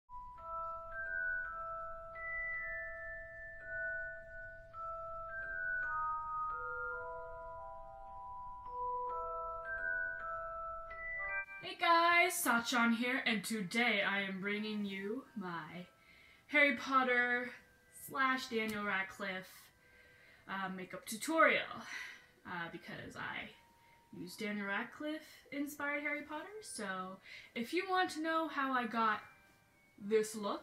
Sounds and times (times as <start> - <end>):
Marimba, xylophone: 0.1 - 13.1
Glockenspiel: 0.1 - 30.6.